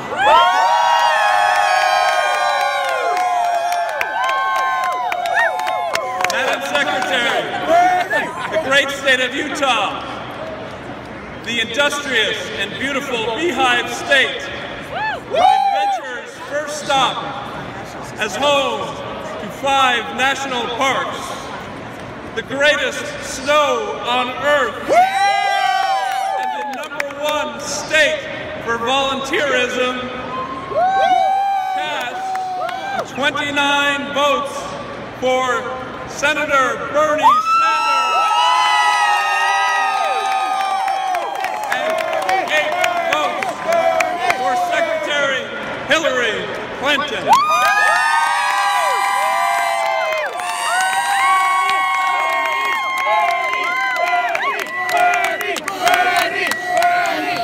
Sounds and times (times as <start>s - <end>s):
Crowd: 0.0s - 57.4s.